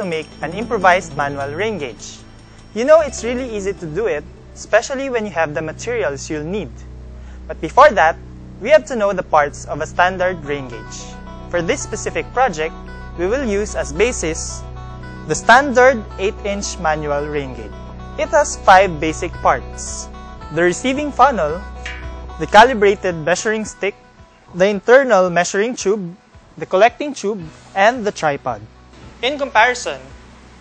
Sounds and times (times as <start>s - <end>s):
Speech: 0.0s - 2.2s, 2.8s - 6.8s, 7.5s - 14.6s, 15.3s - 21.7s, 22.4s - 23.9s, 24.5s - 30.1s
Music: 0.0s - 30.6s.